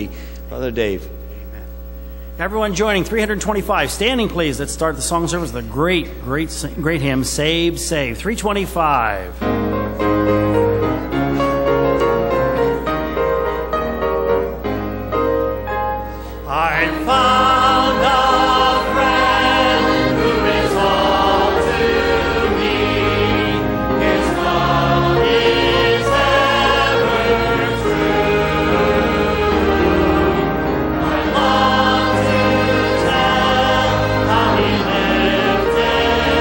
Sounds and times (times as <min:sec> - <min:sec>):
Male singing: 0:16.5 - 0:18.9
Choir: 0:16.5 - 0:36.4.